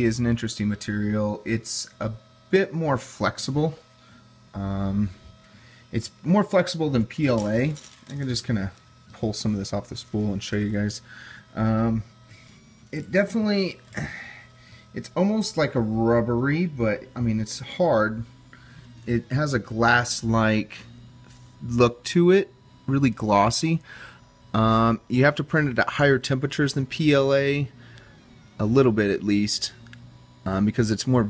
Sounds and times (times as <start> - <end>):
Speech: 0.0 - 3.8, 4.6 - 5.2, 6.0 - 12.1, 13.0 - 14.3, 15.0 - 18.3, 19.1 - 20.9, 21.6 - 23.9, 24.6 - 27.8, 28.6 - 29.8, 30.5 - 31.2
Printer: 0.0 - 31.2.